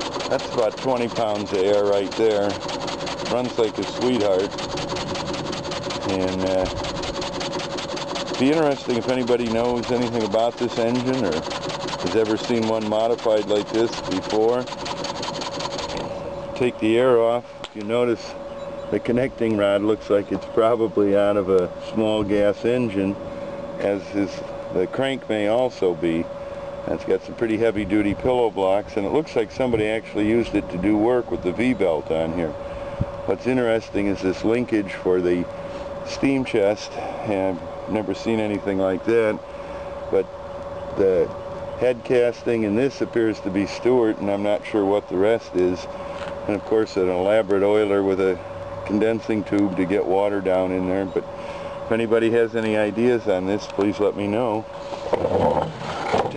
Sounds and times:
Speech: 0.3 - 2.6, 3.3 - 4.5, 6.0 - 6.7, 8.4 - 11.4, 12.0 - 14.7, 16.6 - 23.2, 23.8 - 26.3, 26.9 - 32.6, 33.3 - 35.5, 36.1 - 39.4, 41.0 - 45.9, 46.5 - 51.2, 51.9 - 54.7.

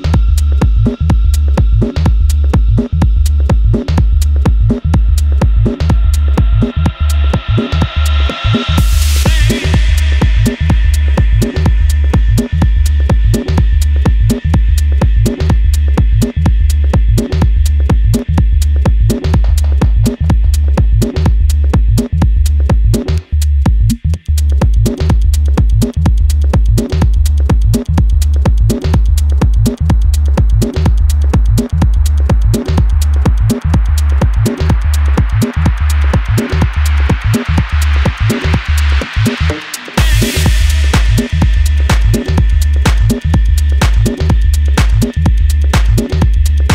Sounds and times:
Music: 0.0 - 46.7.

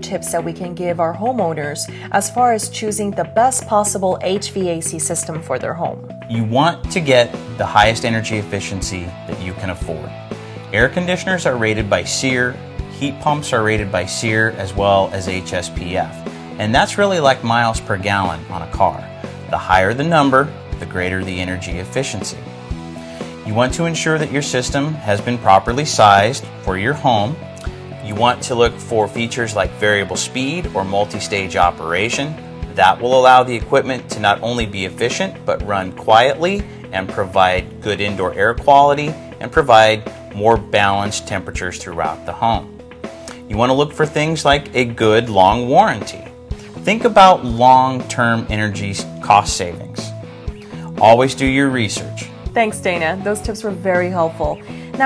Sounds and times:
Speech: 0.0 - 22.4, 23.4 - 27.4, 28.0 - 42.7, 43.5 - 50.2, 51.0 - 55.0
Music: 0.0 - 55.0.

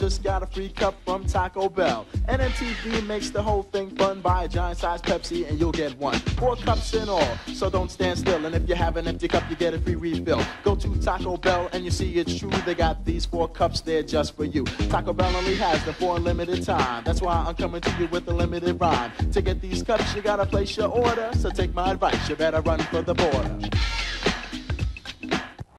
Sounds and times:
Music: 0.0 - 25.7.

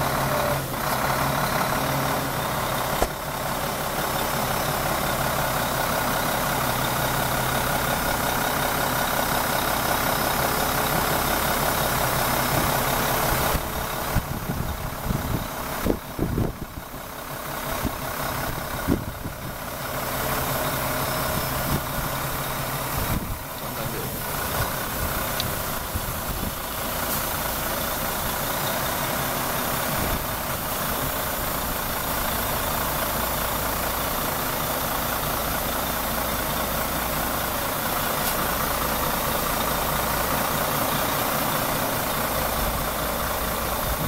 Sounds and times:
Truck: 0.0 - 44.0
Speech: 23.6 - 24.4.

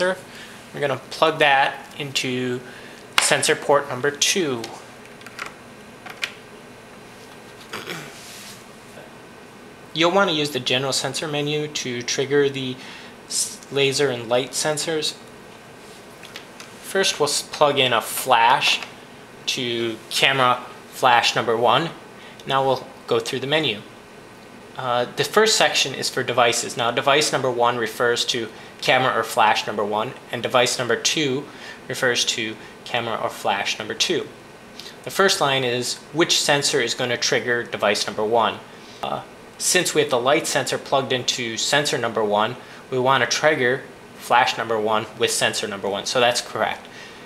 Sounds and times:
Speech: 0.0 - 4.9, 10.0 - 15.2, 16.8 - 24.0, 24.8 - 46.9.

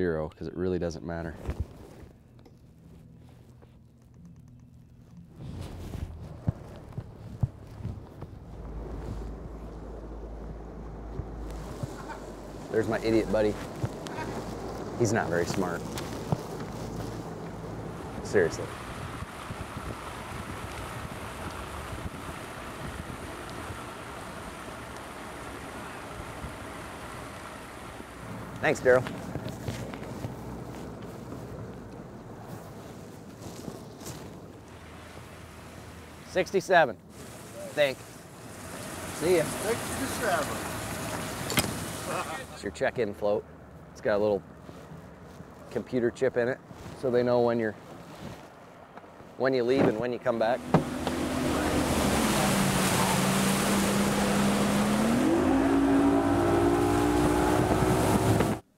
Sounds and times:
Speech: 0.0 - 1.4, 12.7 - 13.6, 15.0 - 15.8, 18.2 - 18.7, 28.6 - 29.1, 36.2 - 38.0, 39.2 - 40.7, 42.1 - 43.4, 44.0 - 44.4, 45.7 - 47.8, 49.4 - 50.6
Vehicle: 0.0 - 58.7.

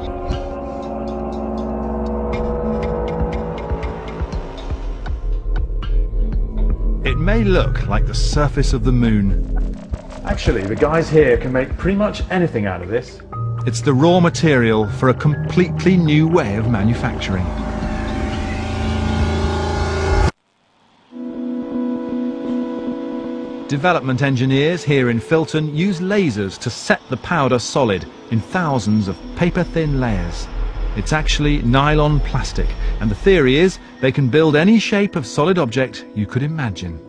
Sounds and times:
Speech: 7.1 - 9.4, 10.3 - 17.6, 23.7 - 37.0.

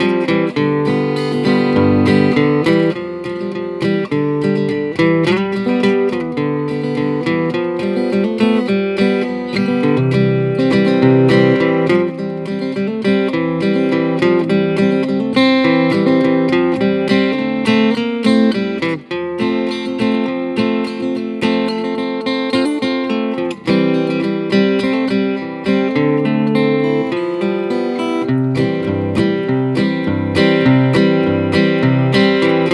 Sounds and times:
Acoustic guitar: 0.0 - 32.7.

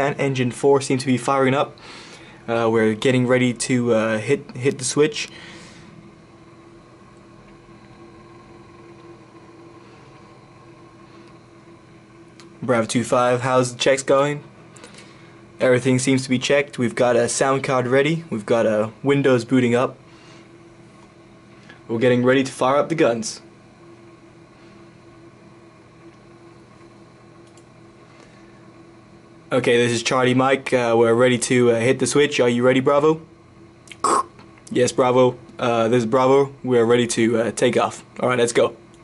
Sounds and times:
Speech: 0.0 - 1.8, 2.5 - 5.3, 12.6 - 14.5, 15.6 - 20.0, 21.9 - 23.5, 29.5 - 33.3, 34.7 - 38.8.

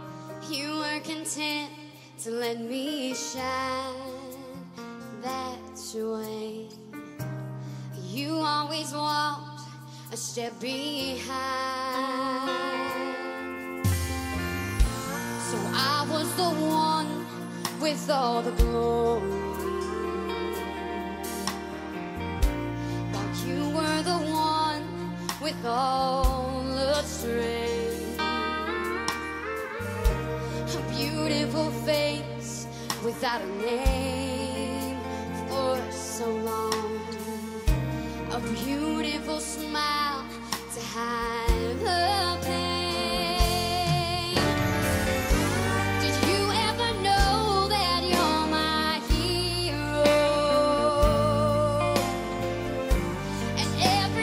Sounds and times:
Music: 0.0 - 54.2.

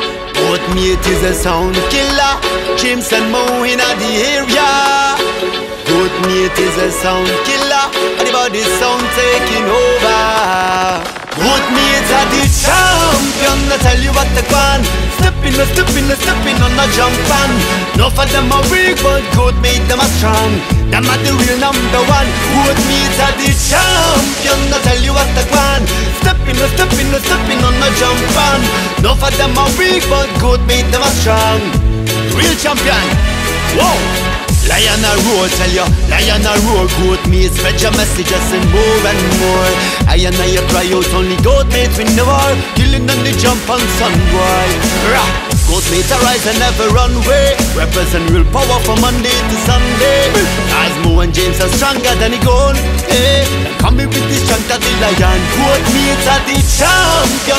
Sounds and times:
Music: 0.0 - 57.5.

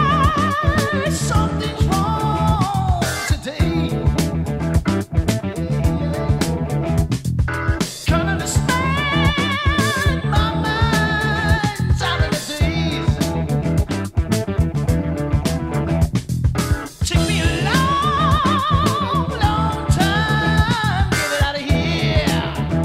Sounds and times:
Music: 0.0 - 22.8.

